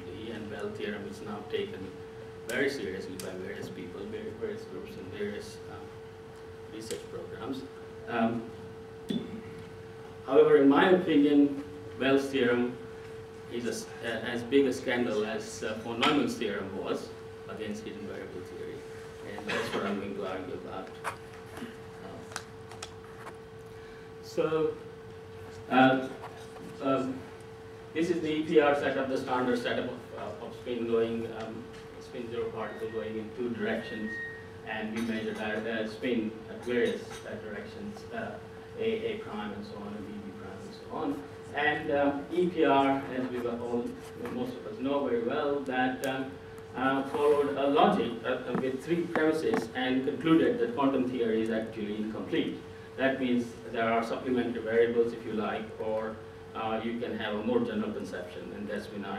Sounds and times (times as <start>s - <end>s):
Speech: 0.0s - 6.0s, 6.7s - 9.4s, 10.2s - 12.8s, 13.5s - 21.1s, 22.0s - 22.4s, 24.2s - 24.8s, 25.6s - 27.3s, 28.0s - 59.1s.